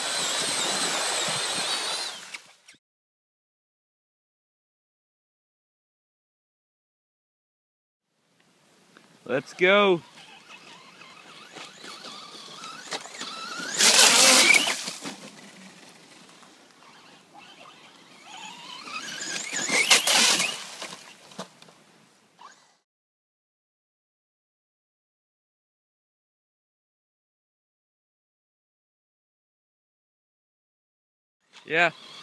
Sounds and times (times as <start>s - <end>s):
Speech: 9.3s - 10.0s, 31.6s - 32.0s.